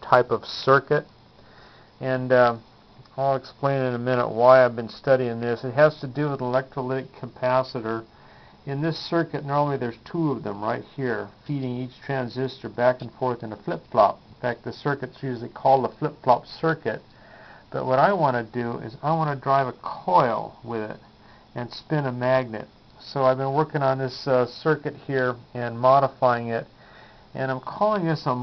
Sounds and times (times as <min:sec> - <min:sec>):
Speech: 0:00.0 - 0:01.1, 0:02.0 - 0:08.1, 0:08.7 - 0:17.0, 0:17.7 - 0:21.0, 0:21.6 - 0:26.7, 0:27.4 - 0:28.4.